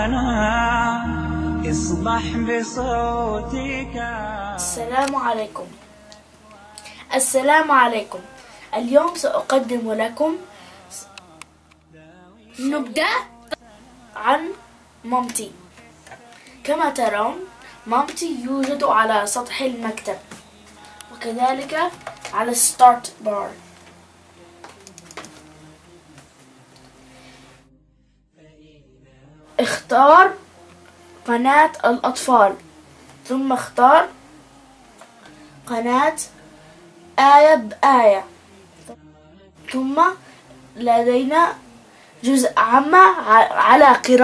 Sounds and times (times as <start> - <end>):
Speech: 4.6 - 5.8, 7.1 - 11.2, 12.6 - 15.6, 16.6 - 23.6, 29.6 - 30.4, 31.3 - 32.6, 33.3 - 34.2, 35.7 - 36.4, 37.2 - 39.0, 39.7 - 40.2, 40.8 - 41.6, 42.2 - 44.2.